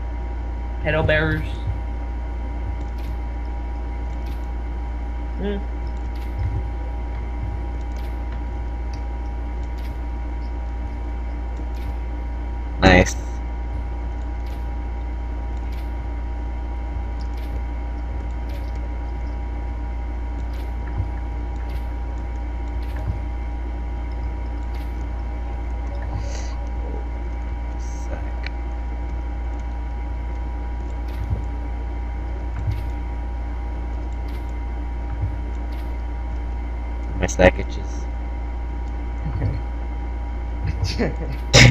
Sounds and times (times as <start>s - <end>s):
Speech: 0.8s - 1.7s, 5.4s - 5.6s, 12.8s - 13.3s, 37.2s - 38.0s, 39.3s - 39.6s, 40.7s - 41.7s.